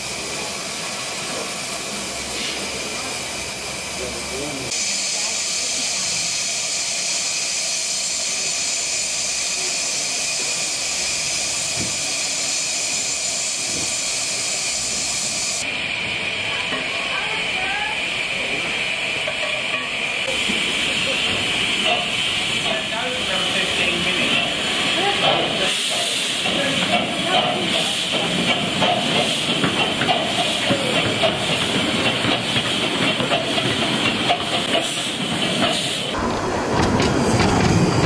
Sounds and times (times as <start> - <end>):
Hiss: 0.0 - 36.2.